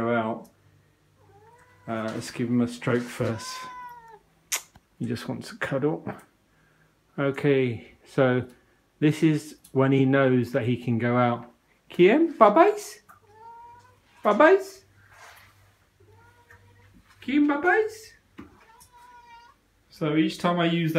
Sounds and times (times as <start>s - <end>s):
Speech: 0.0s - 0.6s, 1.9s - 3.8s, 5.0s - 6.3s, 7.2s - 13.1s, 14.2s - 14.9s, 17.2s - 18.2s, 19.9s - 20.9s.